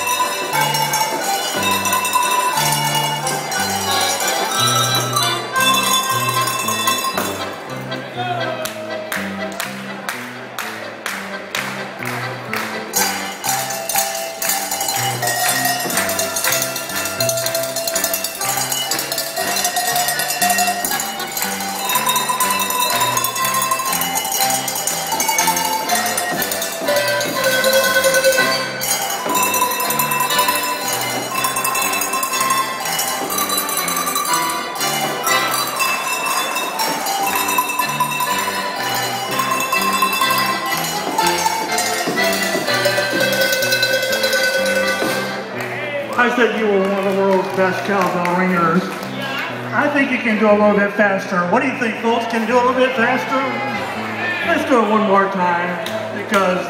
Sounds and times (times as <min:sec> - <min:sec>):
Cowbell: 0:00.0 - 0:07.9, 0:12.9 - 0:45.5.